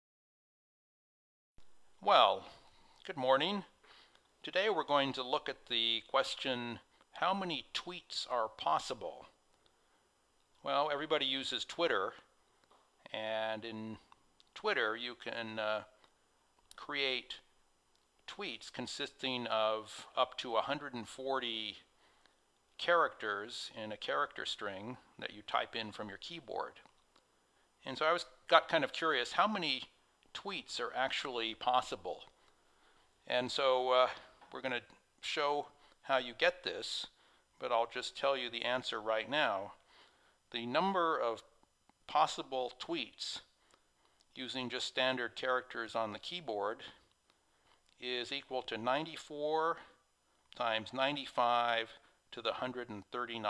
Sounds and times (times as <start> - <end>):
Speech: 2.0 - 3.8, 4.4 - 9.4, 10.6 - 12.3, 13.0 - 16.0, 16.7 - 17.5, 18.3 - 21.9, 22.8 - 26.9, 27.8 - 32.4, 33.2 - 39.8, 40.5 - 43.5, 44.3 - 47.0, 48.0 - 50.0, 50.6 - 53.4.